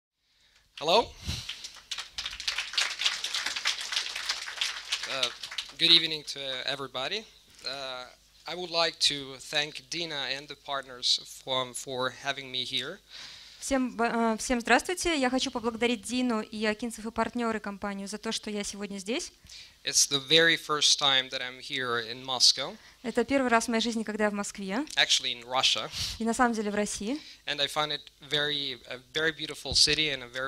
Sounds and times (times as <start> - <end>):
Narration, monologue: 0.2 - 2.4, 3.2 - 30.4
Male speech, man speaking: 0.8 - 1.2, 5.1 - 13.0, 19.9 - 22.8, 25.0 - 25.9, 27.5 - 30.4.